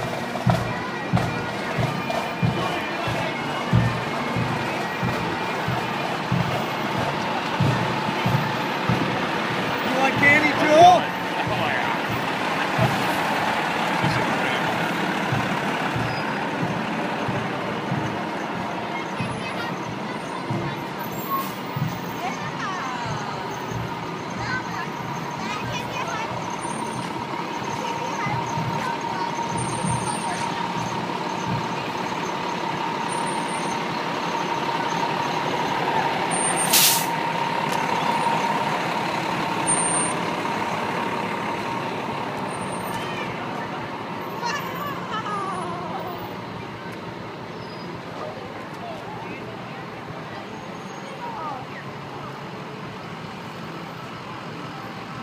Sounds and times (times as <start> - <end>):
Bagpipes: 0.0 - 44.8
Speech: 9.8 - 12.0, 18.8 - 21.5, 27.6 - 32.1, 48.1 - 52.6.